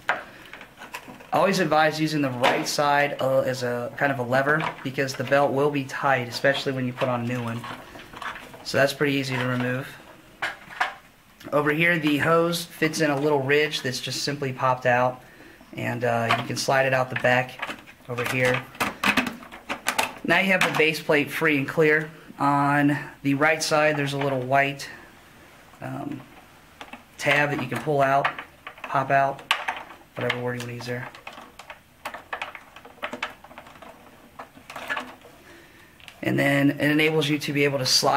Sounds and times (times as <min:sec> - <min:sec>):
Speech: 0:01.3 - 0:07.8, 0:08.6 - 0:10.0, 0:11.4 - 0:15.2, 0:15.8 - 0:18.7, 0:20.2 - 0:25.0, 0:25.8 - 0:26.3, 0:27.2 - 0:29.5, 0:30.2 - 0:31.2, 0:36.2 - 0:38.1.